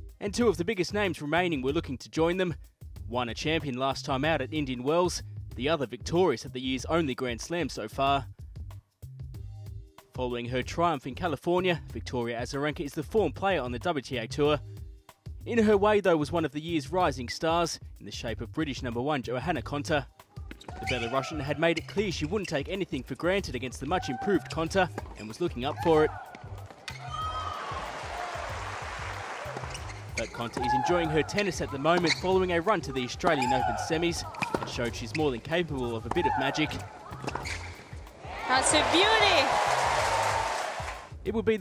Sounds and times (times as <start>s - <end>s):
Music: 0.0s - 41.6s
Speech: 0.2s - 8.3s, 10.1s - 14.6s, 15.5s - 20.1s, 20.7s - 26.1s, 30.2s - 36.8s, 41.2s - 41.6s.